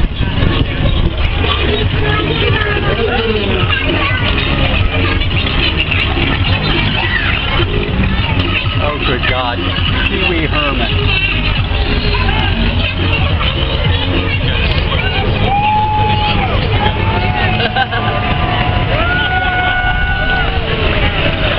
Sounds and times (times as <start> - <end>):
Speech: 0.0 - 18.1
Music: 0.0 - 21.5.